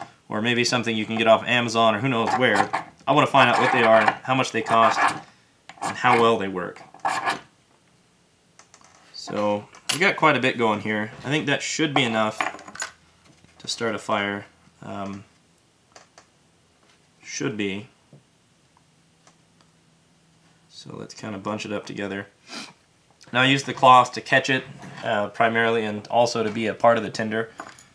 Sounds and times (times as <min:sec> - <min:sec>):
Speech: 0:00.3 - 0:05.2, 0:05.9 - 0:06.8, 0:09.2 - 0:12.4, 0:13.6 - 0:15.3, 0:17.2 - 0:18.0, 0:20.7 - 0:22.4, 0:23.2 - 0:27.5.